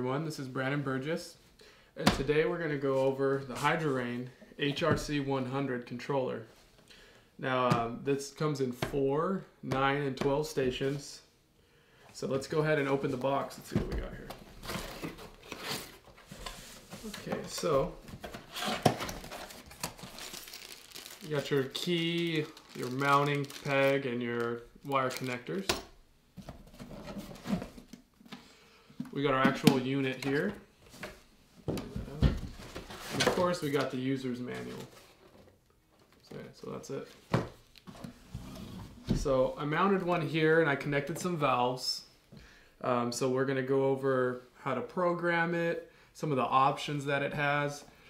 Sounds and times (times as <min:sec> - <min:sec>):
Speech: 0:00.0 - 0:01.4, 0:02.0 - 0:06.5, 0:07.4 - 0:11.3, 0:12.2 - 0:14.4, 0:17.0 - 0:18.0, 0:21.2 - 0:25.8, 0:29.1 - 0:30.6, 0:33.1 - 0:34.9, 0:36.2 - 0:37.2, 0:39.1 - 0:42.1, 0:42.8 - 0:47.9.